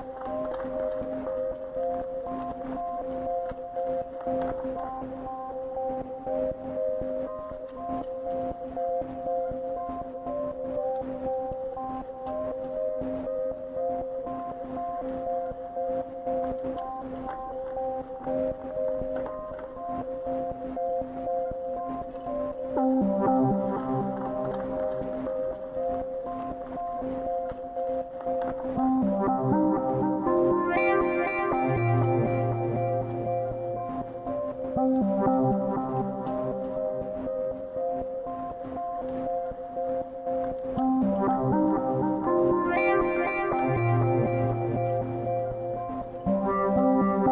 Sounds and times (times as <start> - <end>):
Music: 0.0 - 47.3.